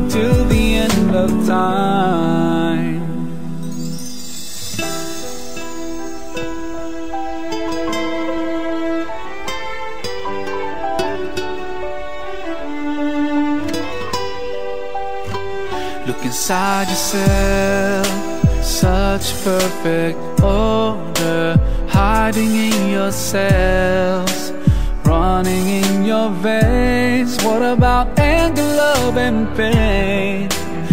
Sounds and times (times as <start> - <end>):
Music: 0.0 - 30.9.